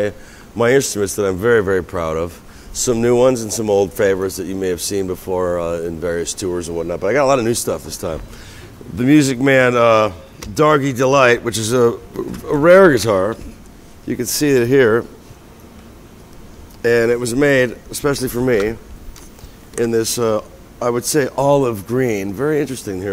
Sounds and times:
Speech: 0:00.0 - 0:08.2, 0:08.9 - 0:13.5, 0:14.1 - 0:15.2, 0:16.8 - 0:18.8, 0:19.8 - 0:23.1.

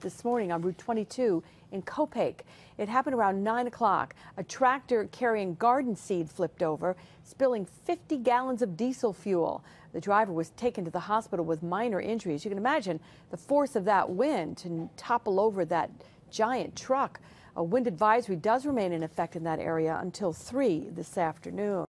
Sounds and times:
Speech: 0:00.0 - 0:21.9.

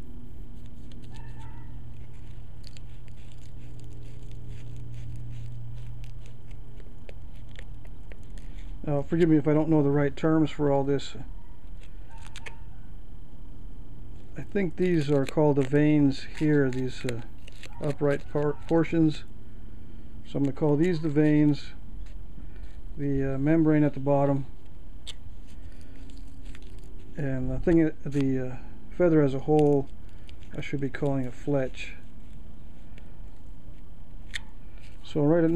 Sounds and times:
Speech: 0:08.8 - 0:11.3, 0:14.4 - 0:19.3, 0:20.3 - 0:21.8, 0:23.0 - 0:24.5, 0:27.2 - 0:29.9, 0:30.5 - 0:32.0, 0:35.0 - 0:35.5.

